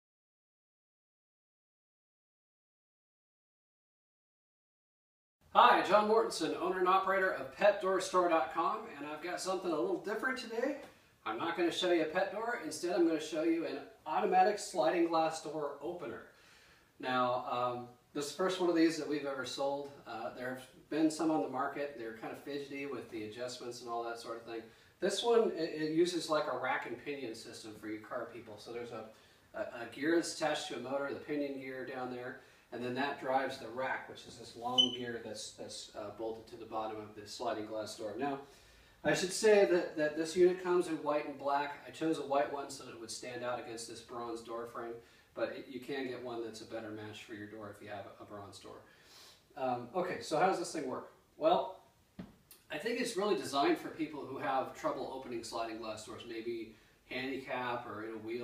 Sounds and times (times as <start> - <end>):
Speech: 5.5 - 16.4, 17.0 - 48.9, 49.5 - 51.8, 52.5 - 58.4.